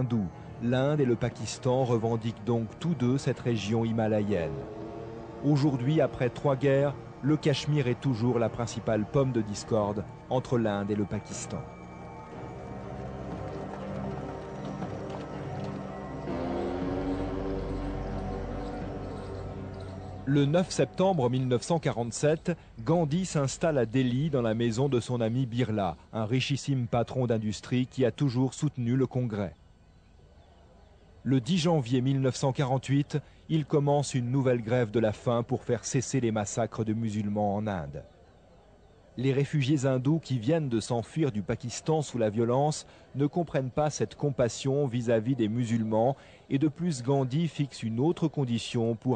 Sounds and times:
Speech: 0.0s - 4.6s, 5.4s - 11.7s, 20.3s - 29.6s, 31.2s - 38.1s, 39.2s - 49.1s.

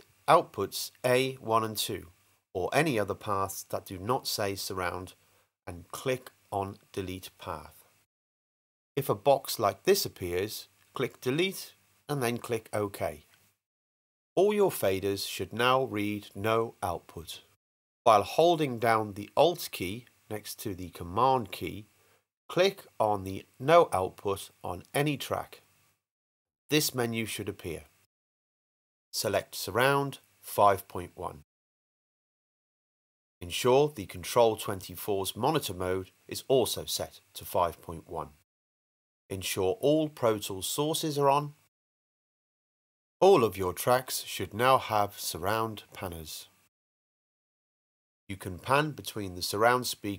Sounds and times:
Speech: 0.3s - 7.9s, 9.0s - 13.3s, 14.4s - 17.5s, 18.1s - 21.9s, 22.5s - 25.6s, 26.7s - 28.0s, 29.2s - 31.4s, 33.4s - 38.4s, 39.3s - 41.6s, 43.2s - 46.6s, 48.3s - 50.1s.

